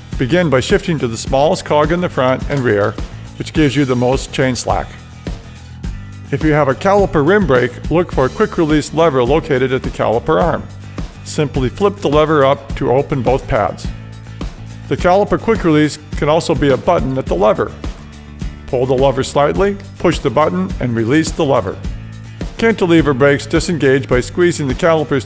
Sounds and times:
Music: 0:00.0 - 0:25.2
Speech: 0:00.2 - 0:05.0, 0:06.3 - 0:14.0, 0:14.9 - 0:17.8, 0:18.7 - 0:21.9, 0:22.6 - 0:25.2.

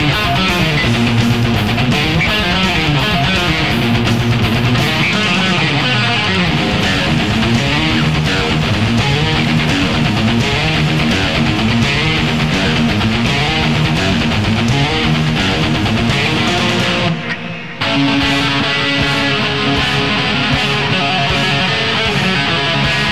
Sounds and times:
Electric guitar: 0:00.0 - 0:23.1.

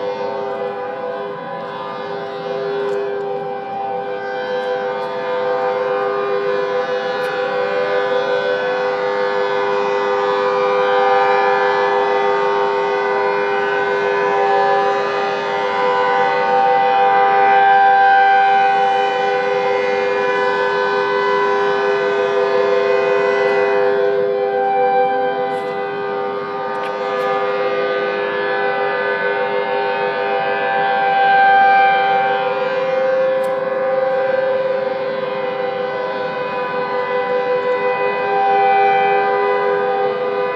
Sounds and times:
Siren: 0:00.0 - 0:40.5.

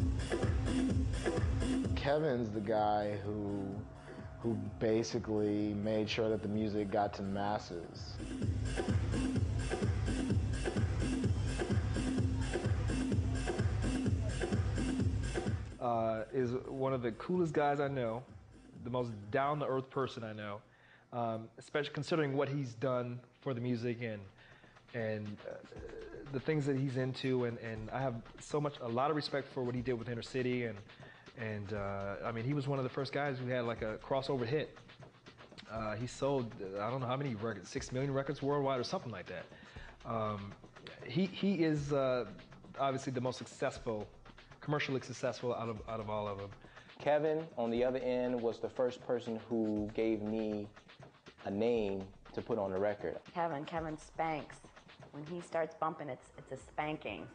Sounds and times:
Techno: 0:00.0 - 0:19.0, 0:23.5 - 0:57.3
Speech: 0:02.0 - 0:03.8, 0:04.4 - 0:08.2, 0:15.8 - 0:20.6, 0:21.2 - 0:24.3, 0:24.9 - 0:30.8, 0:31.4 - 0:34.7, 0:35.6 - 0:39.4, 0:40.0 - 0:50.7, 0:51.4 - 0:54.6, 0:55.2 - 0:57.3.

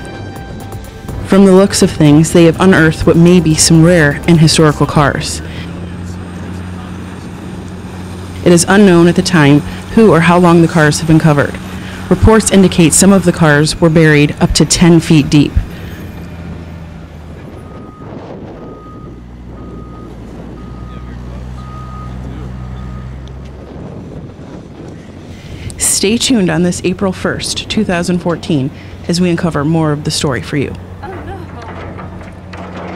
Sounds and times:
Speech: 0:01.3 - 0:07.4, 0:08.4 - 0:15.6, 0:25.8 - 0:31.7.

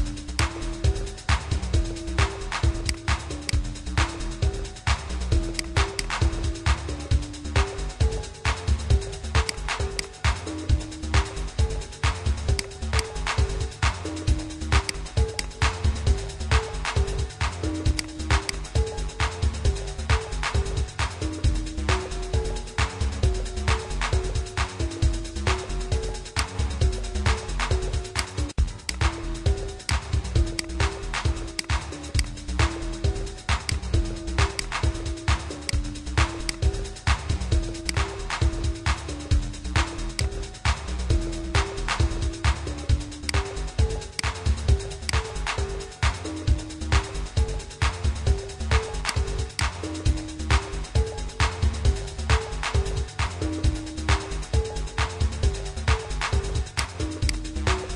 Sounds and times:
Electronica: 0:00.0 - 0:57.9.

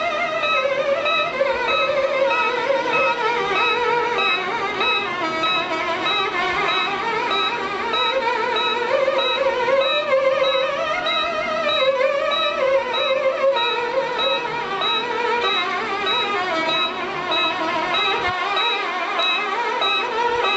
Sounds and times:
Violin, fiddle: 0:00.0 - 0:20.5.

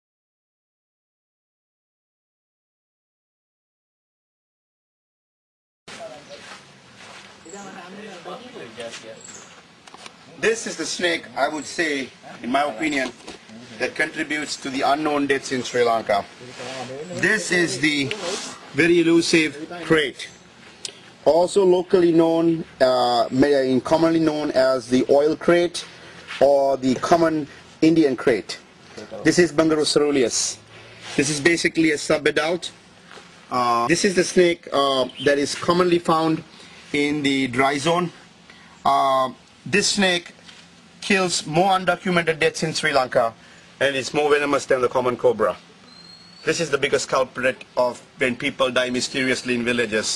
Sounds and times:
Speech: 0:05.9 - 0:06.6, 0:07.5 - 0:09.4, 0:10.3 - 0:20.3, 0:21.2 - 0:30.6, 0:31.2 - 0:32.8, 0:33.5 - 0:38.2, 0:38.8 - 0:40.4, 0:41.0 - 0:45.6, 0:46.4 - 0:50.1
Outside, urban or manmade: 0:05.9 - 0:50.1.

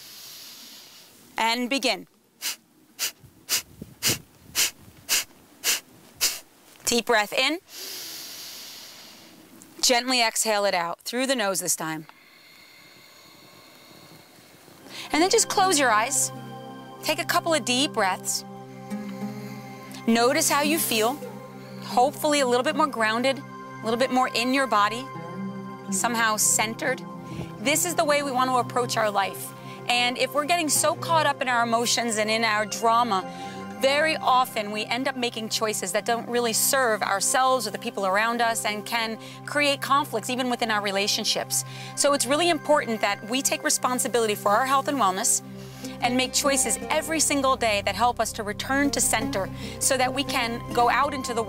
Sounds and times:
Breathing: 0:00.0 - 0:01.2, 0:07.7 - 0:09.5, 0:12.0 - 0:15.2, 0:27.2 - 0:27.6, 0:29.6 - 0:29.9, 0:33.3 - 0:33.7, 0:39.2 - 0:39.5, 0:41.6 - 0:42.0, 0:45.5 - 0:46.0, 0:49.5 - 0:49.8
Speech: 0:01.4 - 0:02.1, 0:06.9 - 0:07.6, 0:09.8 - 0:12.1, 0:15.1 - 0:16.3, 0:20.1 - 0:21.2, 0:27.6 - 0:45.4, 0:46.0 - 0:51.4.

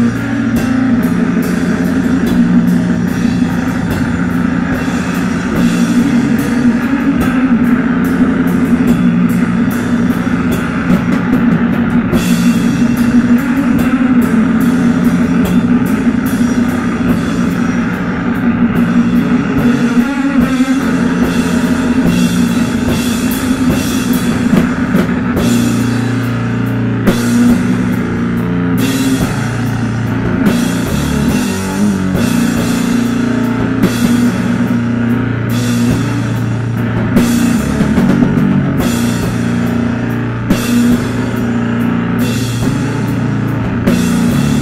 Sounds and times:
Drum: 0:00.0 - 0:44.6
Drum kit: 0:00.0 - 0:44.6
Heavy metal: 0:00.0 - 0:44.6.

